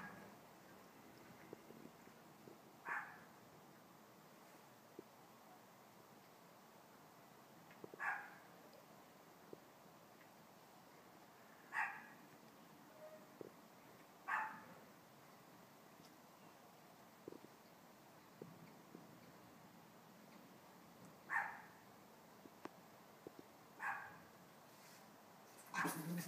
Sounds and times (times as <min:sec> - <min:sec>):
Dog: 0:02.9 - 0:03.2, 0:08.0 - 0:08.4, 0:11.7 - 0:12.1, 0:14.3 - 0:14.7, 0:21.3 - 0:21.7, 0:23.8 - 0:24.2, 0:25.7 - 0:26.2.